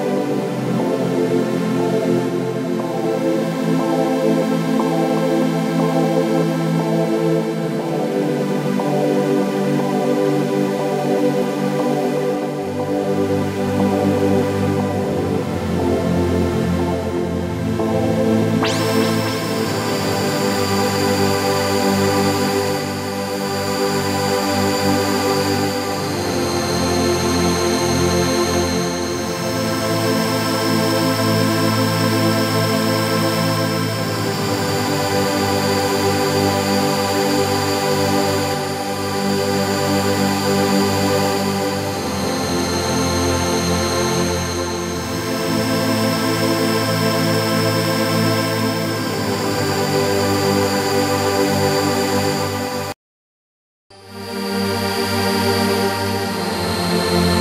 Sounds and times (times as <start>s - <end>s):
Background music: 0.0s - 33.1s.